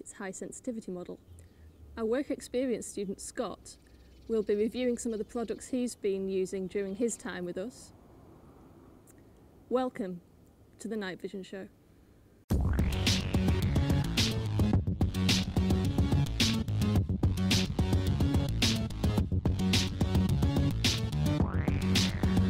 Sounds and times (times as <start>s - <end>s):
Speech: 0.0s - 1.2s, 2.0s - 8.0s, 9.7s - 10.2s, 10.8s - 11.7s
Music: 12.5s - 22.4s.